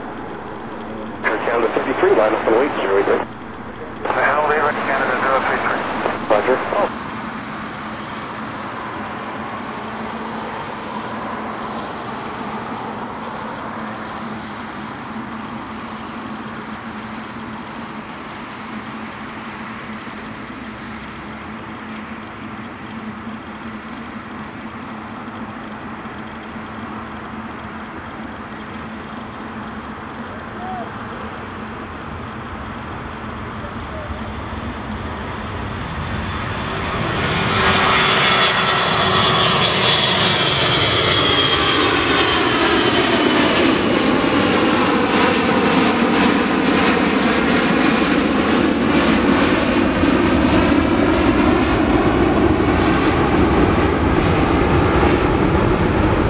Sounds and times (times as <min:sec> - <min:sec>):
Aircraft engine: 0:00.0 - 0:56.3
Fixed-wing aircraft, airplane: 0:00.0 - 0:56.3.